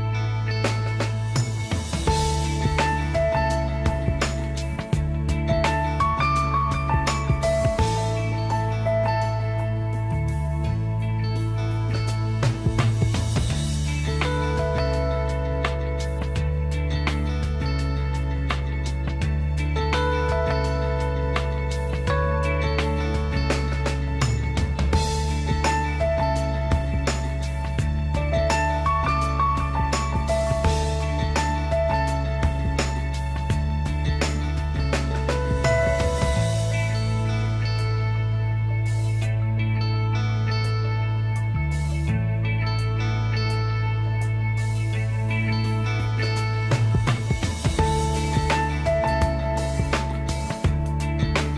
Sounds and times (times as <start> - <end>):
Music: 0.0 - 51.5.